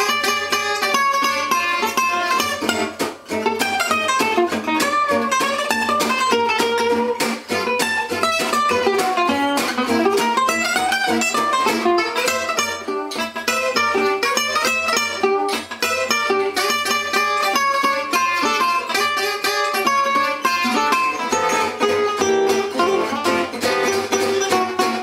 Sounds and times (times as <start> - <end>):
Guitar: 0.0 - 25.0.